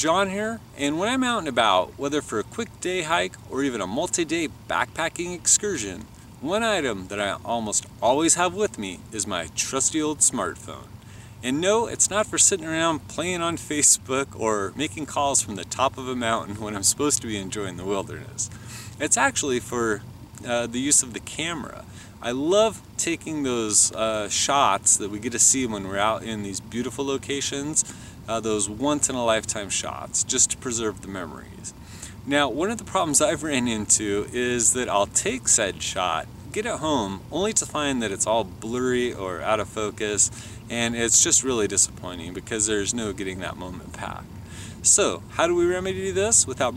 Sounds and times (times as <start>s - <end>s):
Speech: 0.0s - 46.7s.